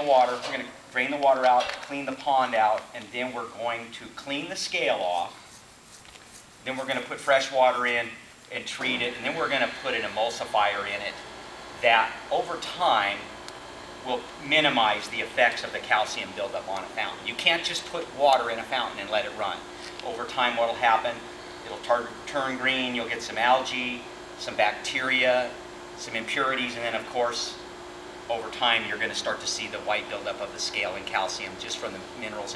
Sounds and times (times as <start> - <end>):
Speech: 0.0 - 5.4, 6.6 - 11.2, 11.8 - 13.3, 14.1 - 27.6, 28.3 - 32.5.